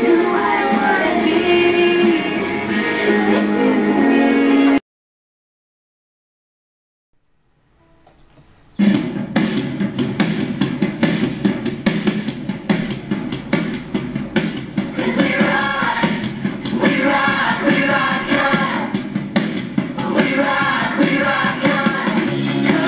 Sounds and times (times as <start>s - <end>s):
Female singing: 0.0s - 4.8s, 15.0s - 19.0s, 20.0s - 22.8s
Music: 0.0s - 4.8s, 7.8s - 22.8s
Male singing: 15.0s - 18.9s, 20.0s - 22.8s.